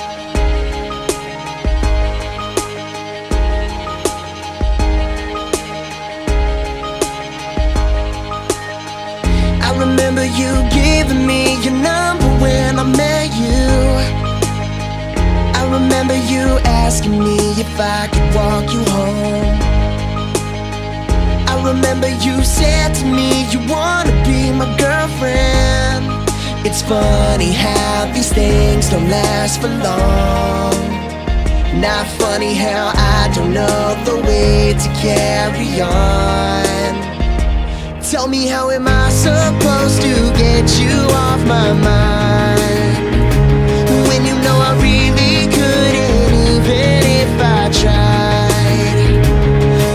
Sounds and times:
Music: 0:00.0 - 0:49.9
Singing: 0:09.6 - 0:14.3, 0:21.4 - 0:43.3, 0:43.9 - 0:49.9.

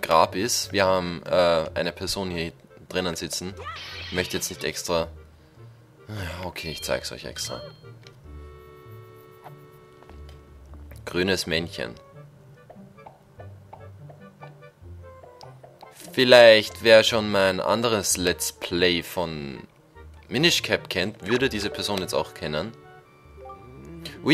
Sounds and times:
Speech: 0:00.0 - 0:05.1, 0:06.1 - 0:07.7, 0:11.1 - 0:12.0, 0:16.0 - 0:19.7, 0:20.3 - 0:22.8, 0:24.0 - 0:24.3
Music: 0:00.0 - 0:24.3.

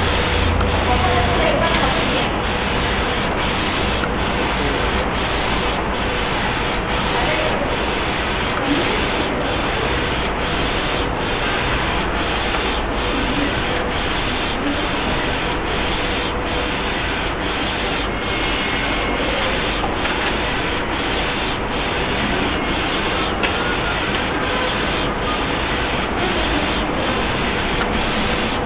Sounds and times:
Printer: 0:00.0 - 0:28.6
Speech: 0:00.8 - 0:02.4, 0:07.1 - 0:09.6, 0:26.0 - 0:27.5.

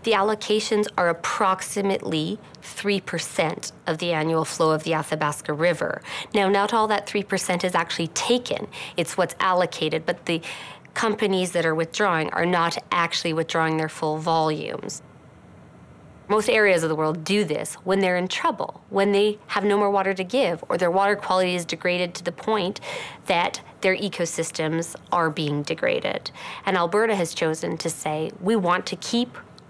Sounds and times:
Speech: 0:00.0 - 0:10.4, 0:11.0 - 0:15.0, 0:16.3 - 0:29.5.

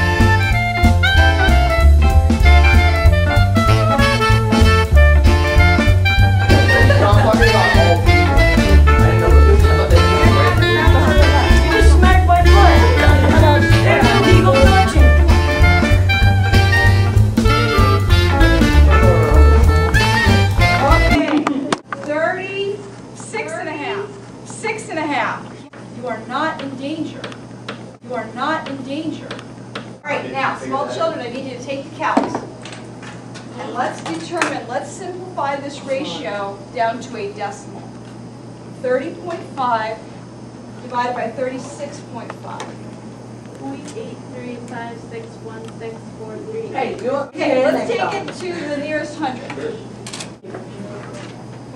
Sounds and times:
Swing music: 0:00.0 - 0:21.3
Speech: 0:09.6 - 0:15.0.

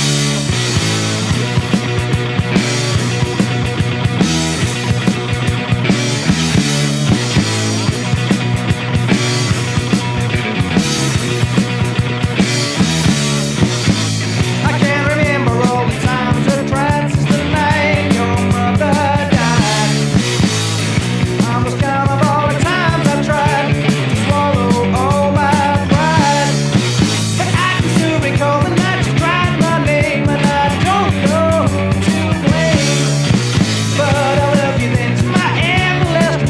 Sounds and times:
Music: 0:00.0 - 0:36.5.

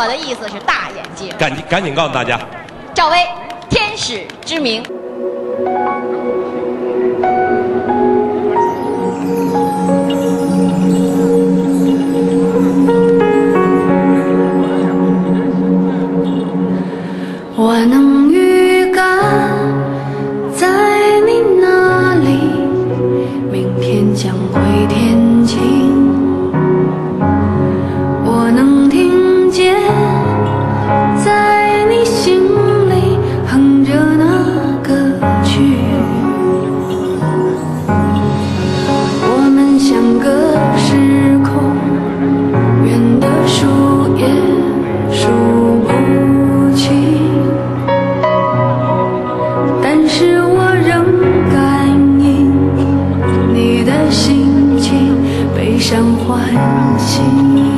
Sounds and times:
Music: 0:03.6 - 0:57.7
Female singing: 0:17.5 - 0:26.4, 0:28.2 - 0:36.6, 0:39.0 - 0:47.8, 0:49.7 - 0:57.7.

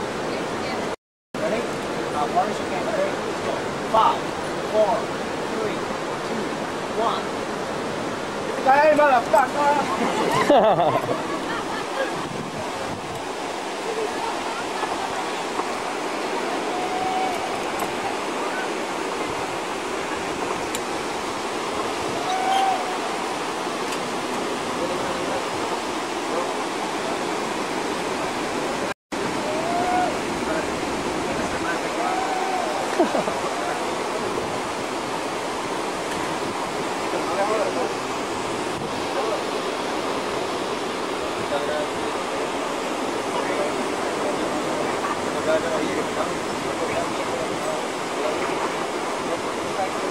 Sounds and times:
Outside, rural or natural: 0:00.0 - 0:50.1.

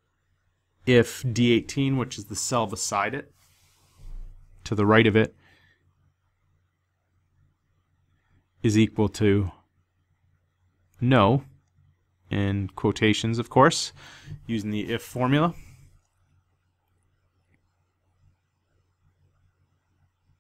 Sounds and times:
Speech: 0:00.8 - 0:03.4, 0:04.6 - 0:05.4, 0:08.6 - 0:09.7, 0:11.0 - 0:11.5, 0:12.3 - 0:15.7.

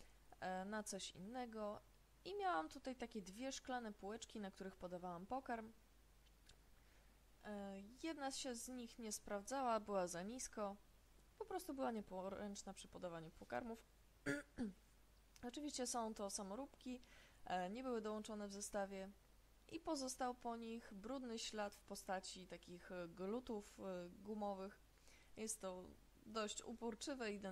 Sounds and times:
Speech: 0:00.4 - 0:05.8, 0:07.4 - 0:10.8, 0:11.4 - 0:13.9, 0:15.4 - 0:24.8, 0:25.4 - 0:27.5.

